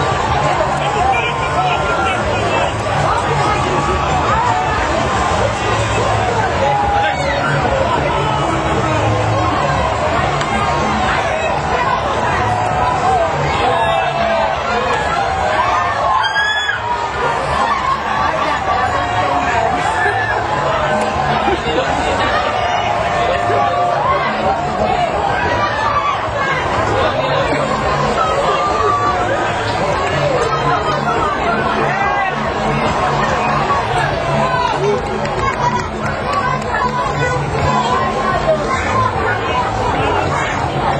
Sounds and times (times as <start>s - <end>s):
Boat, Water vehicle: 0.0s - 40.9s
Music: 0.0s - 40.9s
Speech: 0.0s - 40.9s.